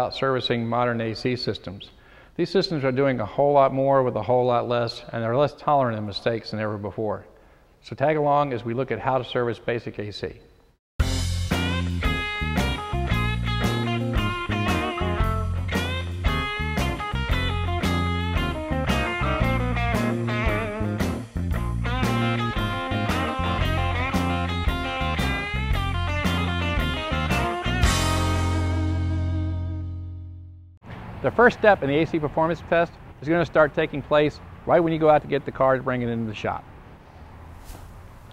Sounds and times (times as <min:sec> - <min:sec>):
Speech: 0:00.0 - 0:10.5, 0:31.2 - 0:36.7
Music: 0:11.0 - 0:30.8.